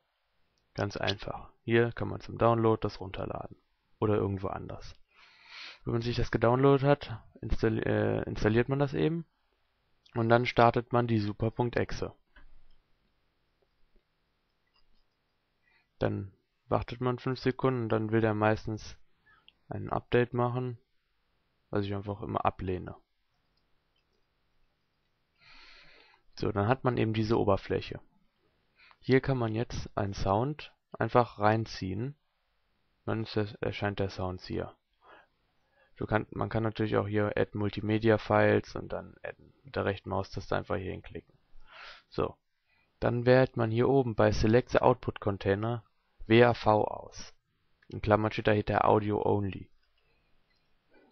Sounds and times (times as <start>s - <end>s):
Speech: 0.8s - 5.0s, 5.8s - 9.3s, 10.1s - 12.2s, 16.0s - 19.1s, 19.7s - 20.9s, 21.7s - 23.1s, 26.4s - 28.1s, 29.0s - 32.2s, 33.0s - 34.8s, 36.0s - 41.3s, 42.1s - 42.4s, 43.0s - 49.7s.